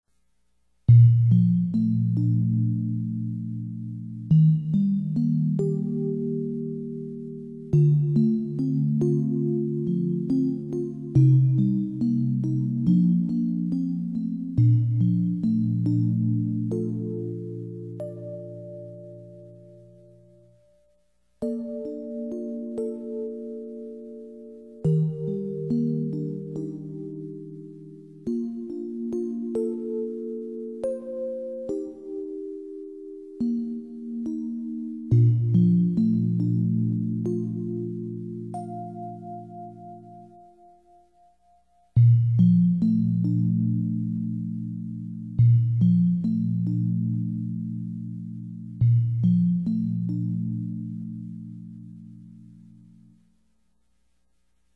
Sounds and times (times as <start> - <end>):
Music: 0.1 - 54.7.